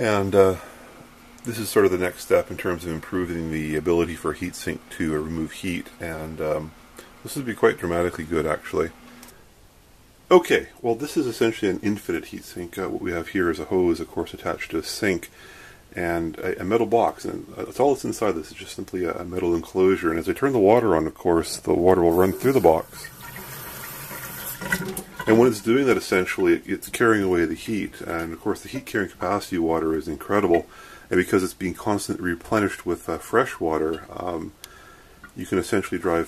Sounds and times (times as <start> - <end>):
Speech: 0.0 - 0.7, 1.4 - 9.0, 10.3 - 23.2, 25.3 - 34.6, 35.4 - 36.2
Inside, small room: 0.0 - 36.2
Sink (filling or washing): 22.1 - 25.9.